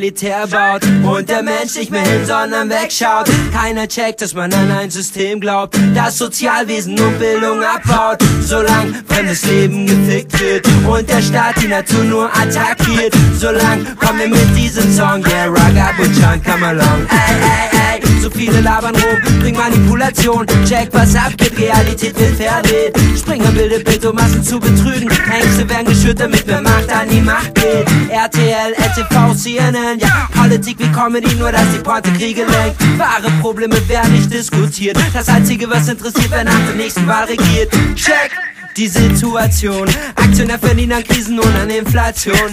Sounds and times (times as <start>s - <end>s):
Music: 0.0s - 38.2s, 38.8s - 42.5s.